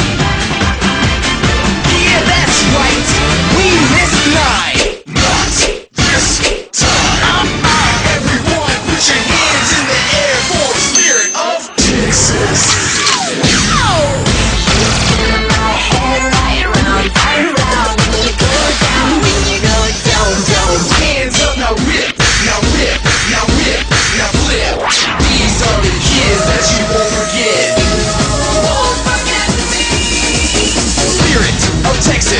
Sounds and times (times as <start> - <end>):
Music: 0.0 - 32.3.